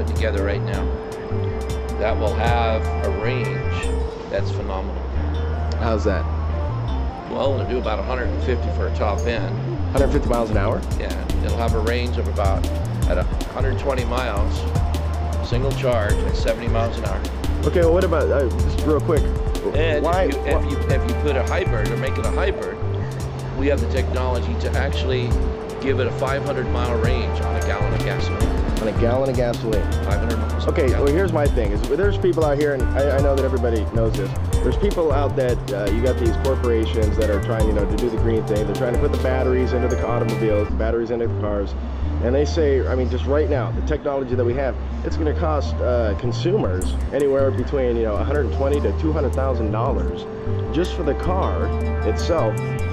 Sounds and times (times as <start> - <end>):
Speech: 0.0 - 0.9, 2.0 - 5.0, 5.8 - 6.2, 7.3 - 14.6, 15.5 - 22.8, 23.6 - 52.6
Music: 0.0 - 52.9.